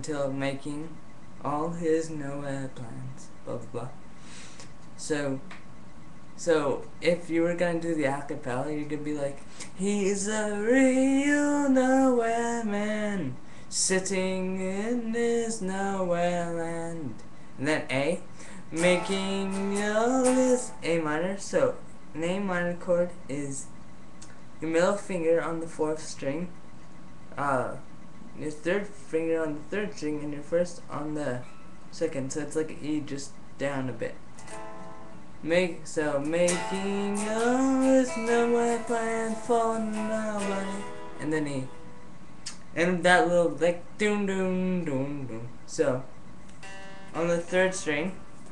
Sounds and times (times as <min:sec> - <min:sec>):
Speech: 0:00.0 - 0:04.0, 0:05.0 - 0:05.5, 0:06.4 - 0:10.3, 0:12.8 - 0:19.2, 0:20.3 - 0:23.7, 0:24.6 - 0:26.6, 0:27.4 - 0:34.2, 0:35.4 - 0:36.6, 0:41.2 - 0:41.7, 0:42.8 - 0:46.1, 0:47.2 - 0:48.2.